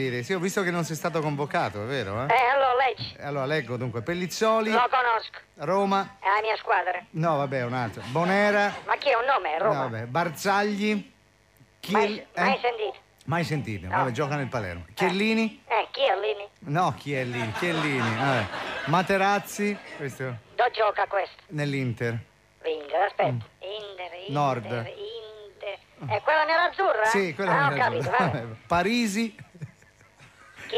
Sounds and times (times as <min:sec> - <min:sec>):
Radio: 0:02.3 - 0:03.2, 0:04.6 - 0:05.6, 0:06.2 - 0:07.1, 0:07.9 - 0:09.9, 0:11.8 - 0:13.0, 0:13.8 - 0:16.5, 0:20.6 - 0:21.6, 0:22.6 - 0:28.6.